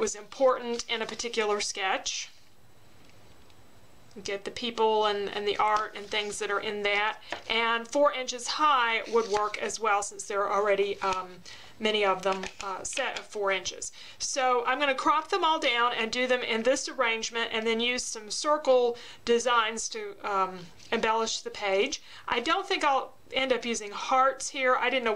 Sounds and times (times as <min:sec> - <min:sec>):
Speech: 0:00.0 - 0:02.4, 0:04.2 - 0:25.1.